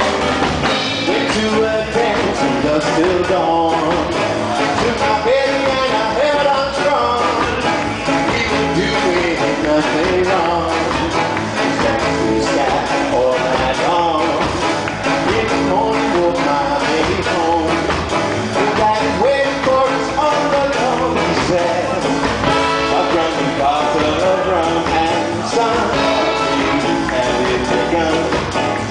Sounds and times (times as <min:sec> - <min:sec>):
Music: 0:00.0 - 0:28.9.